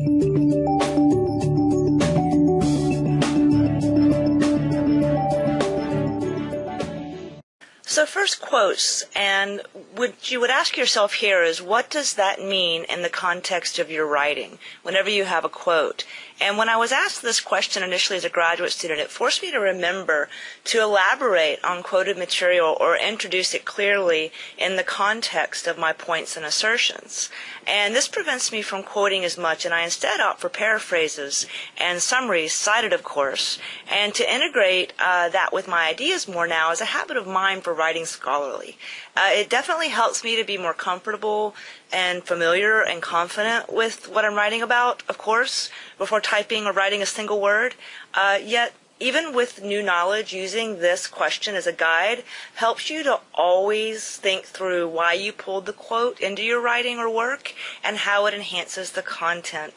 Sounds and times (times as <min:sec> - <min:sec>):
Speech: 0:07.9 - 0:59.7.